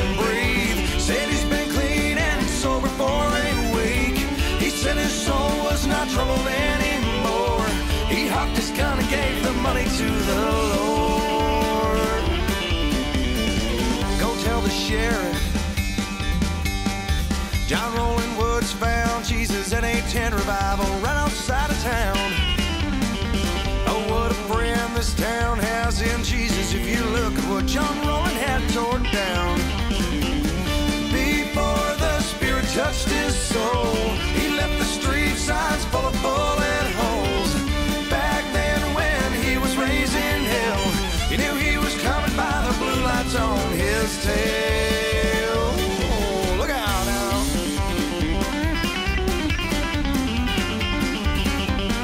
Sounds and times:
Music: 0.0s - 52.0s.

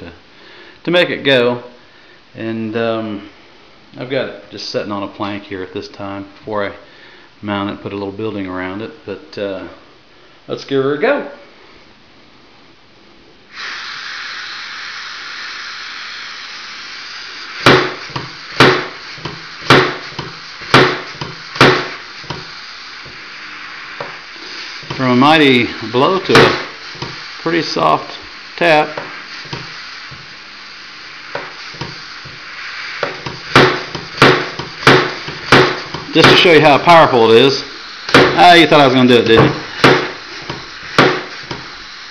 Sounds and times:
Speech: 0.8s - 1.8s, 2.4s - 3.3s, 4.0s - 6.8s, 7.4s - 9.8s, 10.5s - 11.4s, 25.0s - 26.6s, 27.4s - 29.0s, 36.1s - 37.7s, 38.3s - 39.6s.

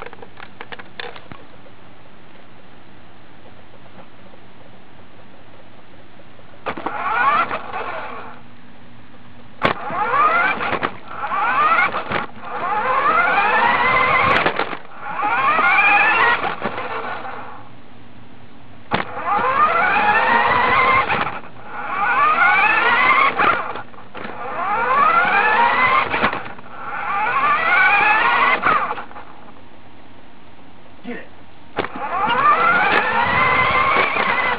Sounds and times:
Car: 0.0s - 34.5s.

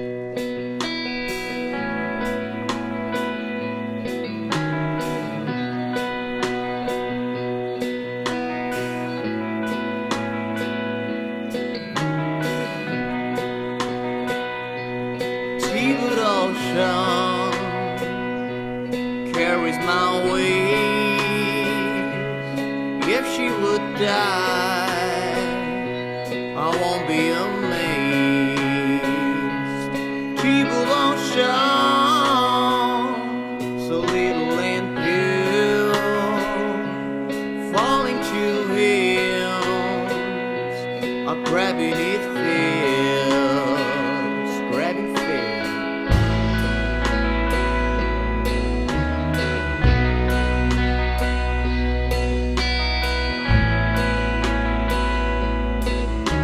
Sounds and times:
Soul music: 0.0s - 56.4s.

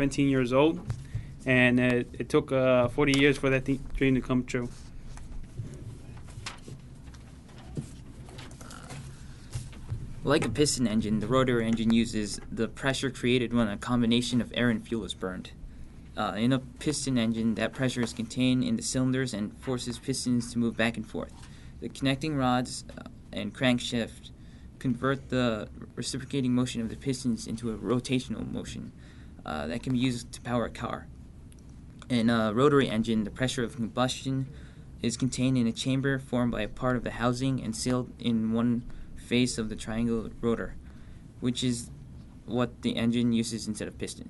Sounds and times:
Speech: 0.0s - 4.8s, 10.2s - 15.6s, 16.2s - 31.1s, 32.0s - 40.8s, 41.4s - 44.2s.

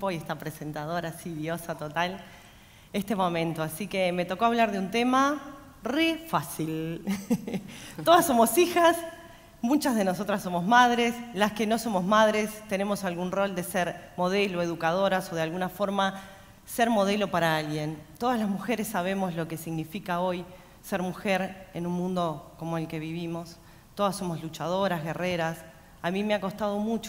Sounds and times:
Speech: 0.0s - 2.2s, 3.0s - 27.0s.

